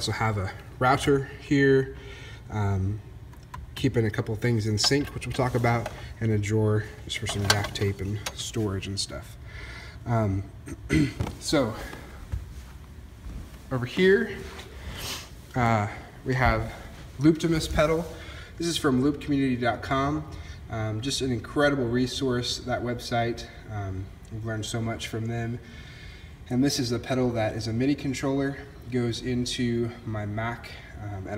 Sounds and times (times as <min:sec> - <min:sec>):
Speech: 0:00.0 - 0:03.0, 0:03.8 - 0:09.4, 0:10.1 - 0:12.0, 0:13.7 - 0:14.5, 0:15.5 - 0:25.6, 0:26.5 - 0:31.3.